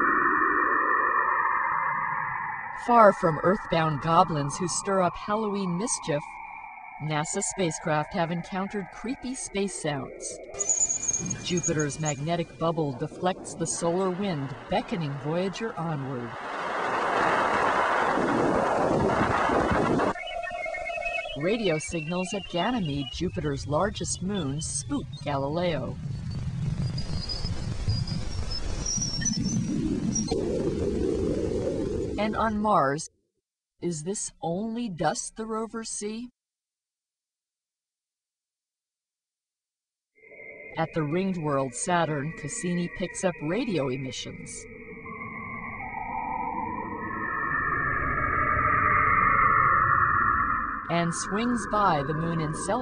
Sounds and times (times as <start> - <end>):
Speech: 2.8 - 6.3, 7.0 - 10.4, 11.2 - 16.4, 21.4 - 26.0, 32.2 - 33.1, 33.8 - 36.4, 40.8 - 44.6, 50.9 - 52.8.